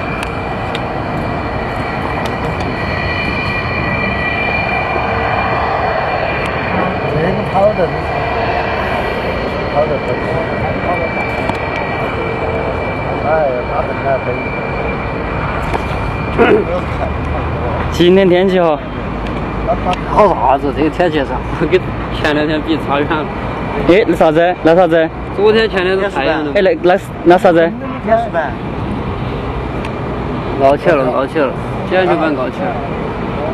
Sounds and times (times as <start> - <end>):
Vehicle: 0.0 - 33.5.